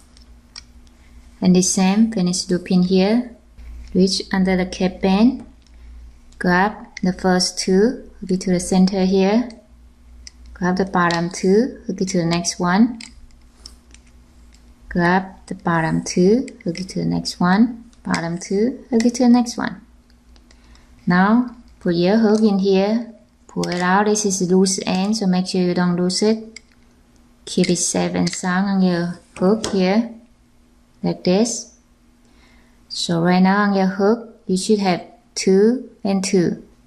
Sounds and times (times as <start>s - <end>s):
Inside, small room: 0.0s - 36.8s
Speech: 1.4s - 3.4s, 4.0s - 5.5s, 6.4s - 9.7s, 10.6s - 13.0s, 14.9s - 19.8s, 21.0s - 26.6s, 27.4s - 30.2s, 31.0s - 31.8s, 32.9s - 36.7s.